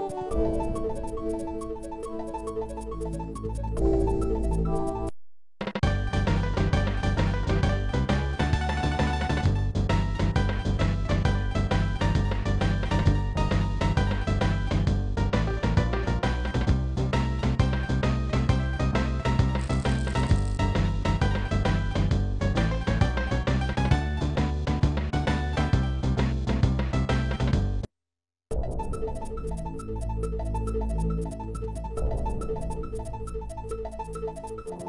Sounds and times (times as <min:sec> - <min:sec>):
Music: 0:00.0 - 0:05.1, 0:05.7 - 0:27.9, 0:28.5 - 0:34.8.